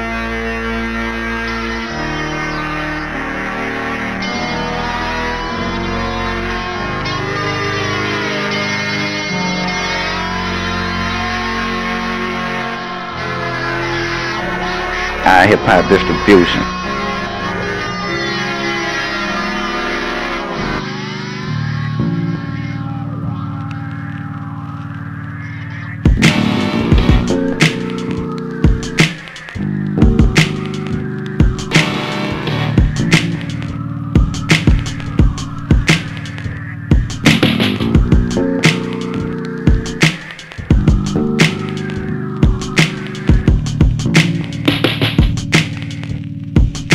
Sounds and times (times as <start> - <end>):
Music: 0.0 - 46.9
Speech: 15.2 - 16.7.